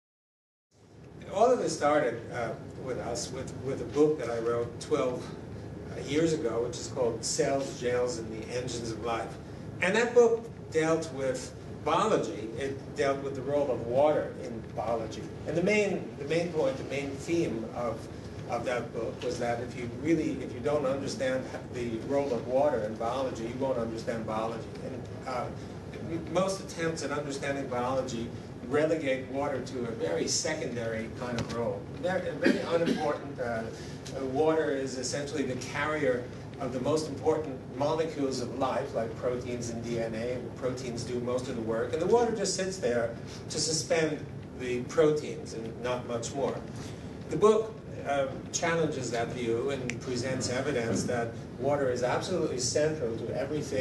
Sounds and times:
Speech: 0:01.2 - 0:46.7, 0:47.3 - 0:53.8.

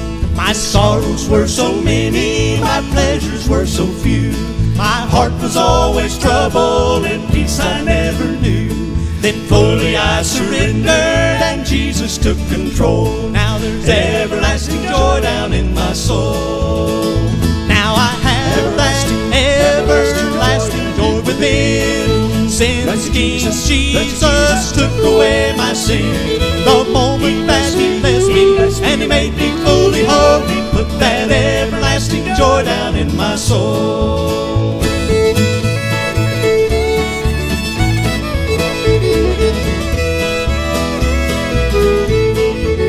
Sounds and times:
Male singing: 0:00.4 - 0:35.0
Choir: 0:00.7 - 0:04.4, 0:05.1 - 0:17.4, 0:18.3 - 0:35.0.

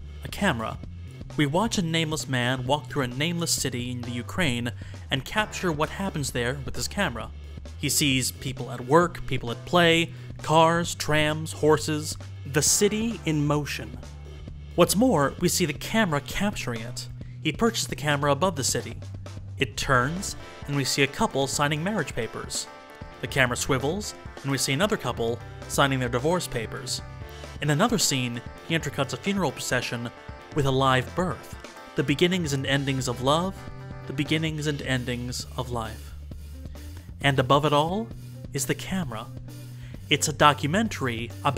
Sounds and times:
Music: 0:00.0 - 0:41.5
Speech: 0:00.2 - 0:00.8, 0:01.4 - 0:14.0, 0:14.8 - 0:19.0, 0:19.6 - 0:36.2, 0:37.2 - 0:39.3, 0:40.1 - 0:41.5.

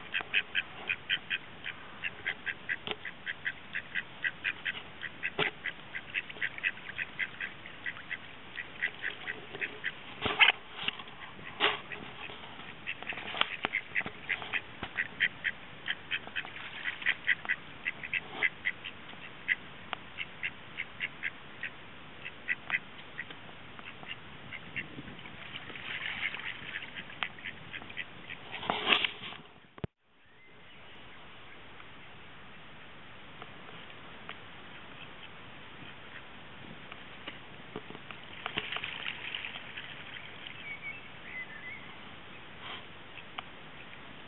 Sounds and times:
Quack: 0:00.0 - 0:19.6, 0:20.2 - 0:28.5.

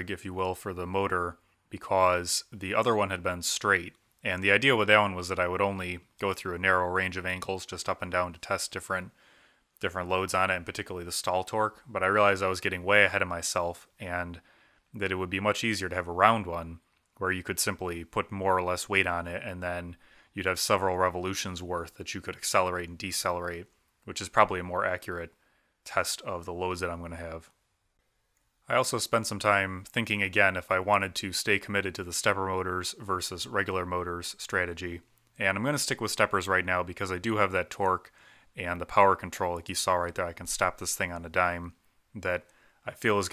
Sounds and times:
Speech: 0:00.0 - 0:09.2, 0:09.8 - 0:14.4, 0:15.0 - 0:27.6, 0:28.7 - 0:43.3.

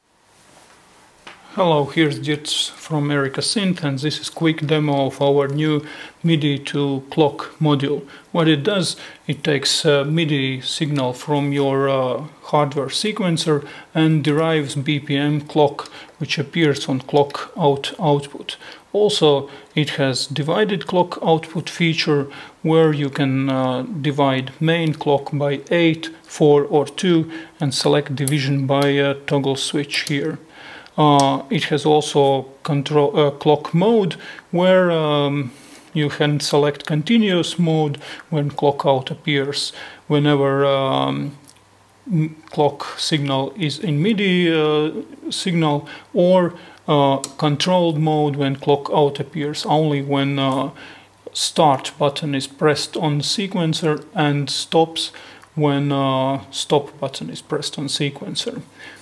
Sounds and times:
Speech: 0:01.4 - 0:58.8.

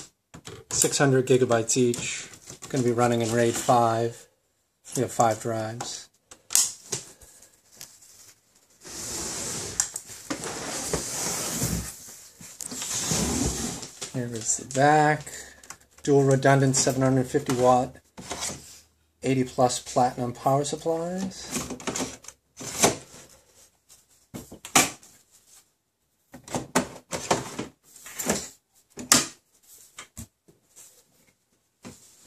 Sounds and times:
Inside, small room: 0:00.0 - 0:32.2
Speech: 0:00.8 - 0:04.3, 0:04.9 - 0:06.1, 0:14.1 - 0:18.0, 0:19.2 - 0:21.6.

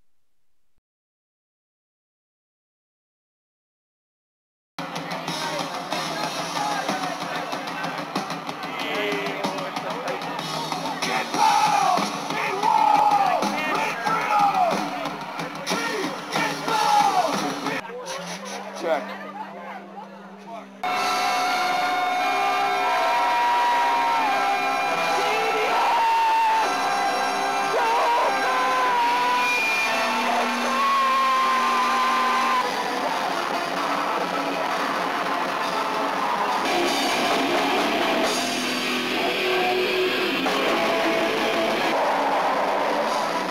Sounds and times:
Music: 0:04.8 - 0:43.5
Speech: 0:04.9 - 0:20.8.

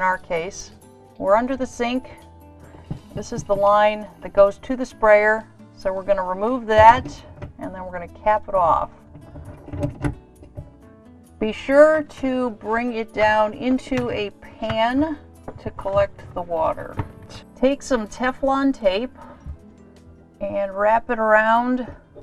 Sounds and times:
Music: 0:00.0 - 0:22.2
Speech: 0:03.2 - 0:08.9, 0:11.4 - 0:17.0, 0:17.6 - 0:19.1, 0:20.4 - 0:21.9.

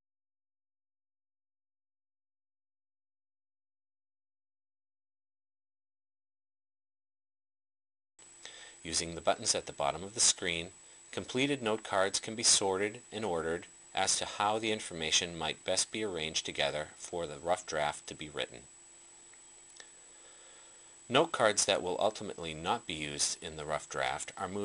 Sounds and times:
Speech: 0:08.8 - 0:18.7, 0:21.1 - 0:24.6.

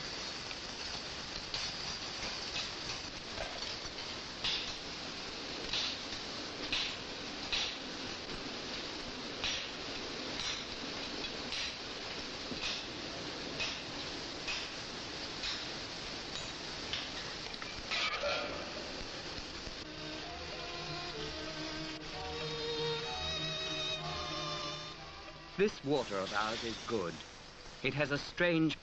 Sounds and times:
Music: 0:19.8 - 0:25.6
Speech: 0:25.6 - 0:27.2, 0:27.8 - 0:28.8.

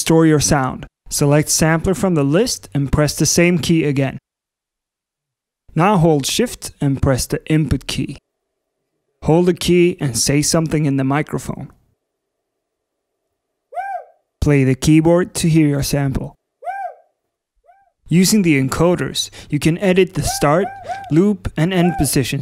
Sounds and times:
Speech: 0:00.0 - 0:04.2, 0:05.7 - 0:08.2, 0:09.2 - 0:11.8, 0:14.4 - 0:16.4, 0:18.1 - 0:22.4.

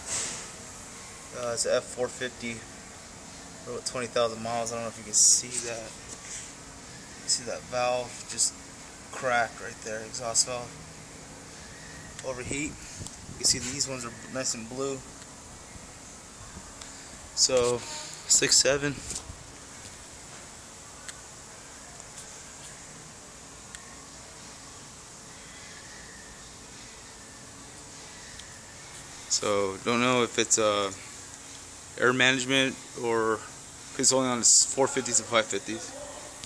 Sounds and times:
Speech: 0:01.4 - 0:02.6, 0:03.7 - 0:06.0, 0:07.3 - 0:08.5, 0:09.2 - 0:10.7, 0:12.2 - 0:12.8, 0:13.4 - 0:15.1, 0:17.4 - 0:19.0, 0:29.3 - 0:31.0, 0:32.0 - 0:36.3.

